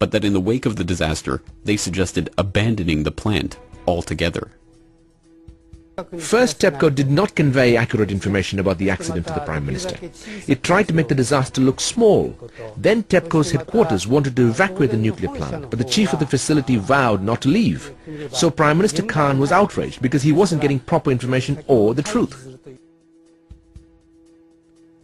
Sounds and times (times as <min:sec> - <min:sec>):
Speech: 0:00.0 - 0:04.6, 0:06.0 - 0:22.8.